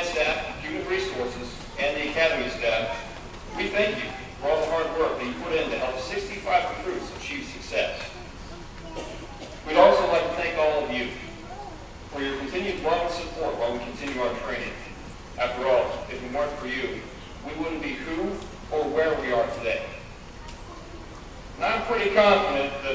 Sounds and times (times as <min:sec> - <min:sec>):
Male speech, man speaking: 0:00.0 - 0:08.2, 0:09.6 - 0:11.4, 0:12.1 - 0:20.0, 0:21.6 - 0:22.9
Narration, monologue: 0:00.0 - 0:22.9.